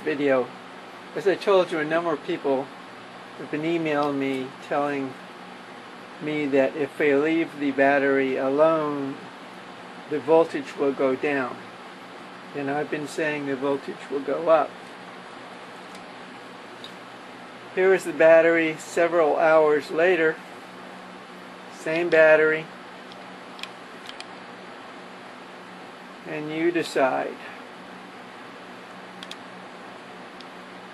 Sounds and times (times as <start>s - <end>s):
Speech: 0.0s - 0.6s, 1.2s - 2.7s, 3.4s - 5.2s, 6.2s - 9.3s, 10.1s - 11.6s, 12.5s - 14.8s, 17.8s - 20.4s, 21.7s - 22.7s, 26.2s - 27.6s.